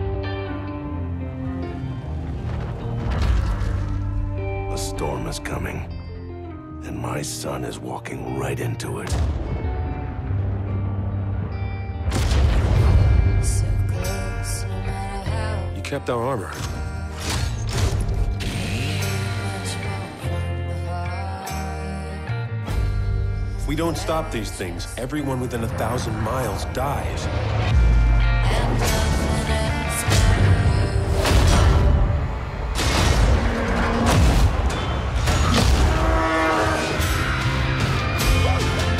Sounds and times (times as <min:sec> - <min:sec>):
Music: 0:00.0 - 0:38.9
Speech: 0:06.8 - 0:09.1.